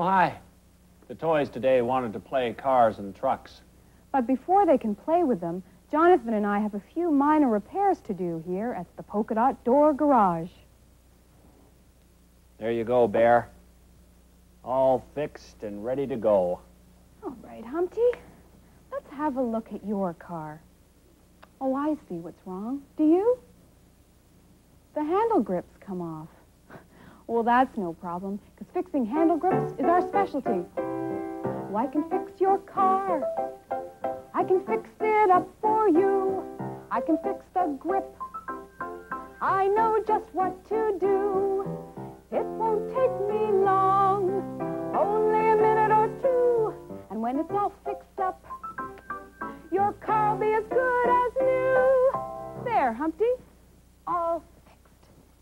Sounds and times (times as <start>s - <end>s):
Speech: 1.1s - 3.6s, 25.0s - 26.4s, 54.1s - 54.8s
Music: 28.9s - 52.9s.